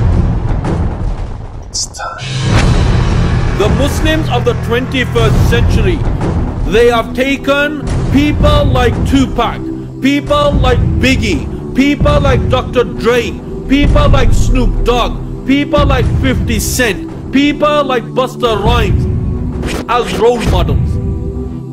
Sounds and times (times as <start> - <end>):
Music: 0.0 - 21.7
Male speech, man speaking: 1.8 - 2.4, 3.5 - 6.1, 6.7 - 19.0, 19.9 - 21.0.